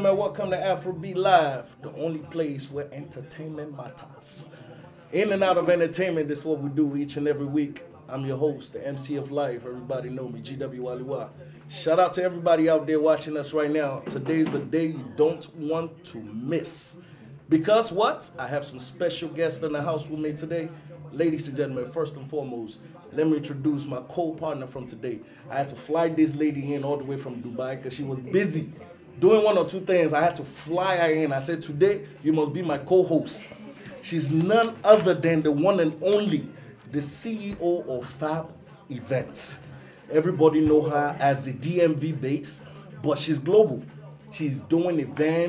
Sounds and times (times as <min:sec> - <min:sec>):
Speech: 0:00.0 - 0:45.4.